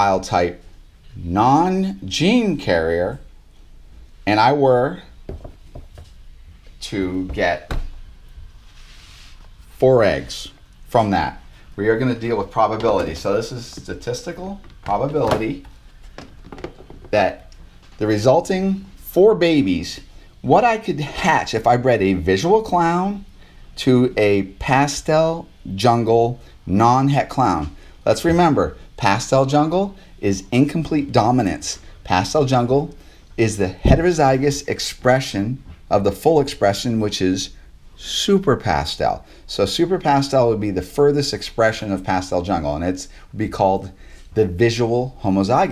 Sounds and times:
Speech: 0.0s - 3.3s, 4.2s - 5.1s, 6.8s - 7.8s, 9.8s - 15.7s, 17.1s - 45.7s.

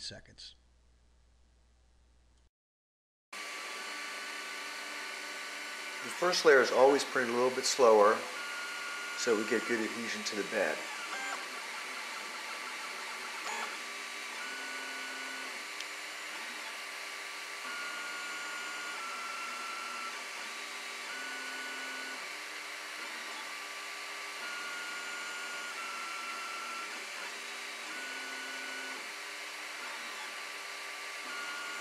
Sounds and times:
Speech: 0.0s - 0.6s, 6.1s - 8.3s, 9.2s - 10.8s
Printer: 3.4s - 31.8s.

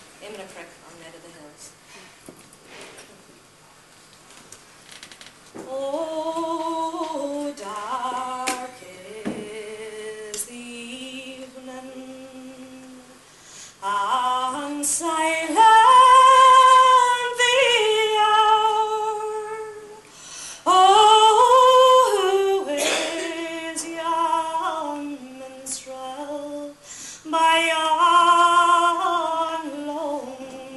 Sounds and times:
Female singing: 5.6s - 13.2s, 13.8s - 20.0s, 20.7s - 30.7s.

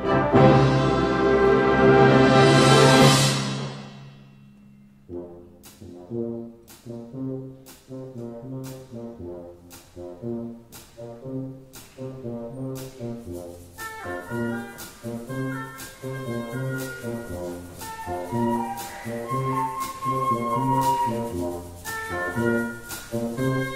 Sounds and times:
Trombone: 0.0s - 4.0s, 5.1s - 23.7s
Orchestra: 0.0s - 23.7s
Percussion: 0.0s - 23.7s.

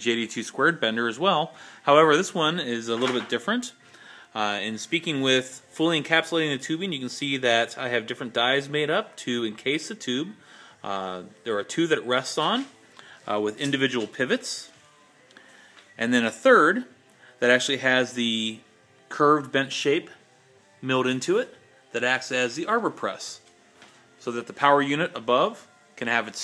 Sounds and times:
Speech: 0.0s - 3.7s, 4.4s - 14.7s, 16.0s - 20.2s, 20.8s - 23.4s, 24.2s - 26.4s
Music: 0.0s - 26.4s.

